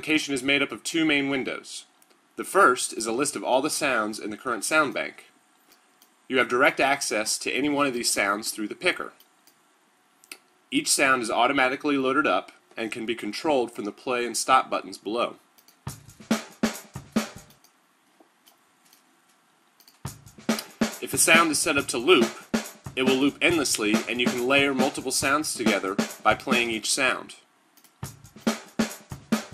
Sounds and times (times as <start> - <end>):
Speech: 0.0 - 5.4, 6.3 - 9.2, 10.7 - 15.4, 21.0 - 22.4, 23.0 - 27.5
Music: 15.7 - 17.6, 19.9 - 26.8, 27.9 - 29.5.